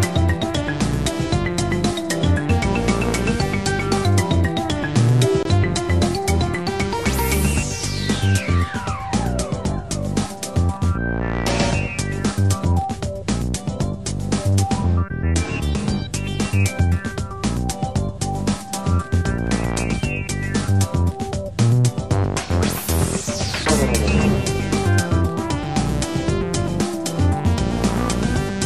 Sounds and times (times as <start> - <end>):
Soundtrack music: 0.0 - 28.6
Theme music: 11.1 - 12.1, 22.6 - 26.6.